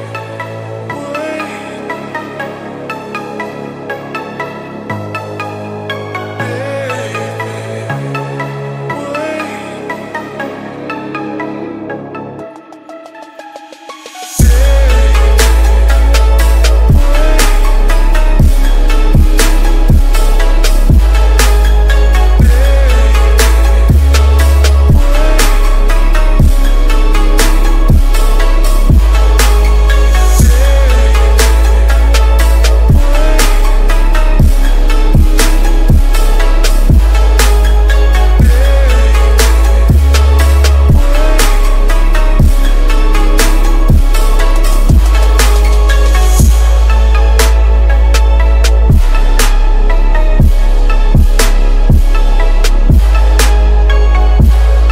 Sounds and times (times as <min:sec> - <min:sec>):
Music: 0:00.0 - 0:54.9.